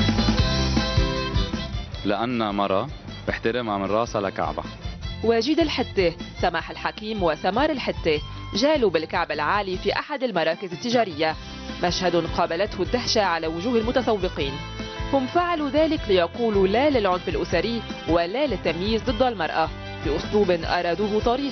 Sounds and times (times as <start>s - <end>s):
Music: 0.0s - 21.5s
Speech: 2.1s - 4.6s, 5.2s - 14.6s, 15.2s - 21.5s.